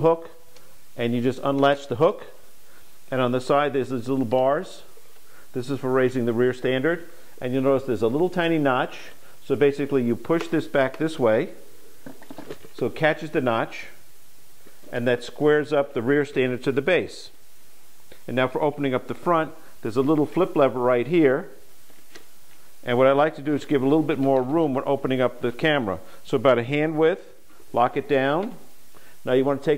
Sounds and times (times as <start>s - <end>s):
Speech: 0.0s - 0.4s, 1.0s - 2.4s, 3.1s - 4.9s, 5.6s - 11.6s, 12.8s - 14.0s, 14.9s - 17.4s, 18.3s - 21.6s, 22.8s - 29.7s.